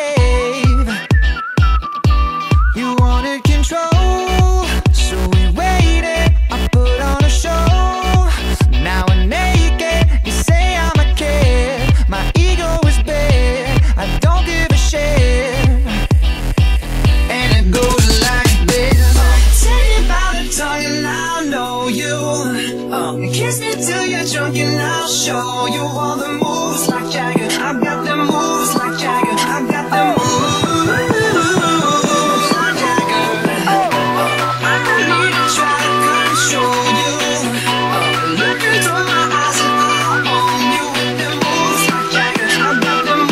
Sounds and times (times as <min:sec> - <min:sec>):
Electronic dance music: 0:00.0 - 0:43.3.